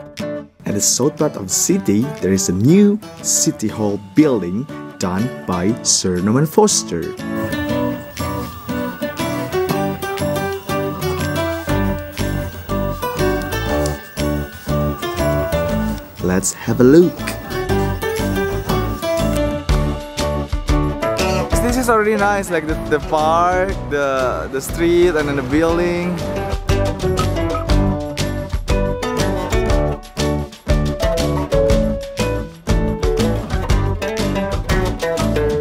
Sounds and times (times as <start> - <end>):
Music: 0.0 - 35.6
Speech: 0.6 - 7.1, 16.2 - 17.4, 21.5 - 26.2.